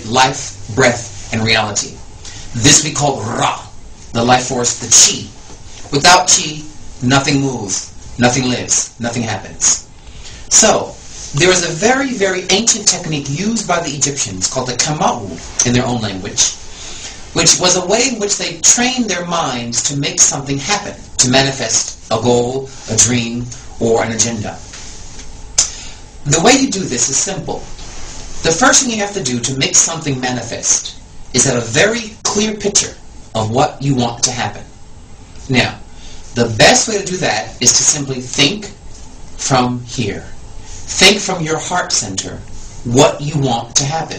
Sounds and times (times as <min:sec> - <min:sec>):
Speech: 0:00.0 - 0:09.9, 0:10.5 - 0:16.6, 0:17.4 - 0:24.7, 0:26.2 - 0:27.7, 0:28.4 - 0:34.7, 0:35.5 - 0:38.8, 0:39.4 - 0:44.1.